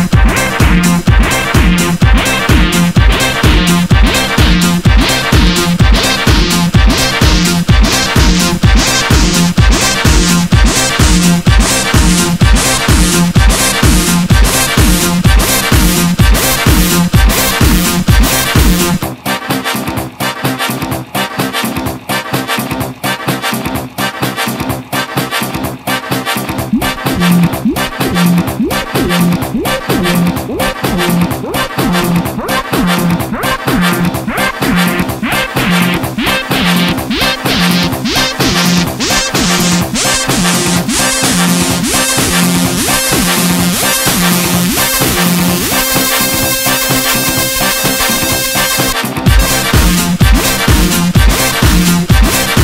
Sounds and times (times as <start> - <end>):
Music: 0.0 - 52.6.